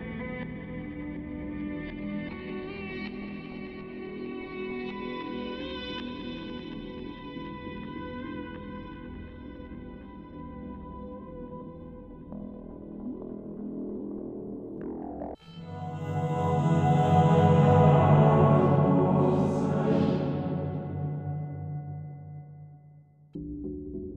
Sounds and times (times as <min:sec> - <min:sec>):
Music: 0:00.0 - 0:24.1.